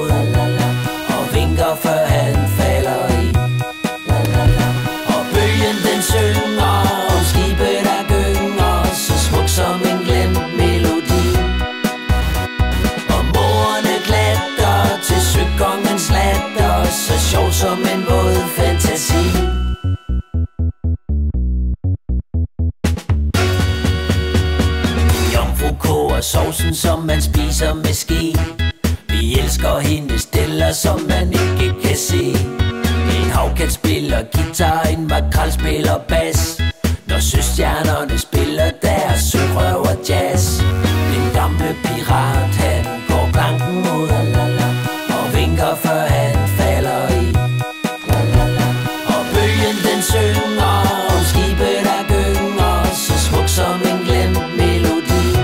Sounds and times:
Synthesizer: 0:00.0 - 0:20.6, 0:35.7 - 0:55.4.

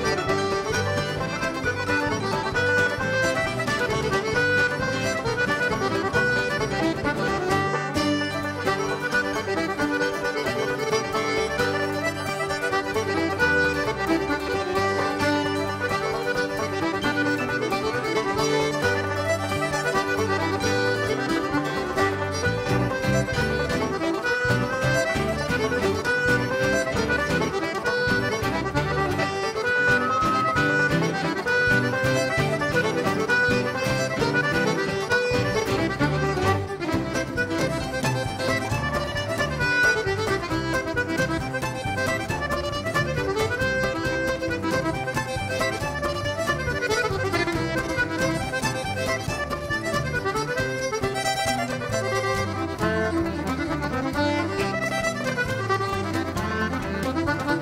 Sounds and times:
Music: 0:00.0 - 0:57.6.

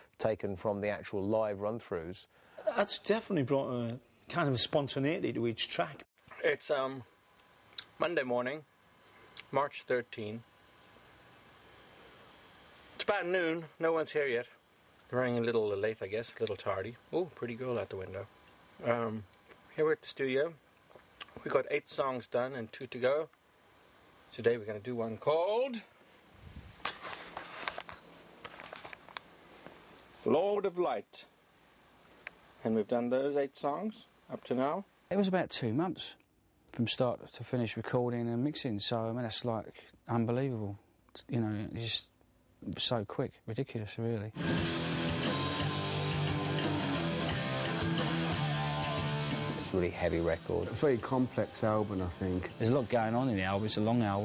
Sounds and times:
Speech: 0:00.2 - 0:07.1, 0:08.0 - 0:08.7, 0:09.4 - 0:10.5, 0:13.0 - 0:20.6, 0:21.4 - 0:23.4, 0:24.3 - 0:25.9, 0:30.2 - 0:31.4, 0:32.6 - 0:44.4, 0:49.7 - 0:54.2.

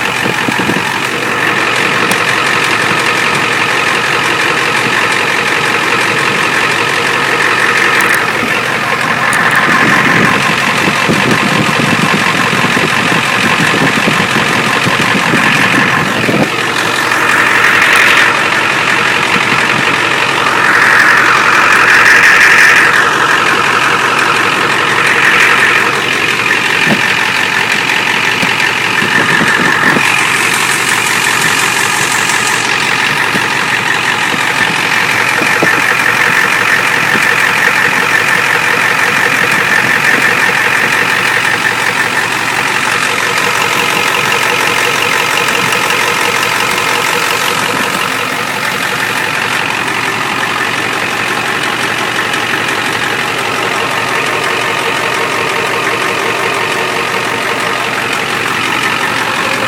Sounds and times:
Idling: 0:00.0 - 0:59.6.

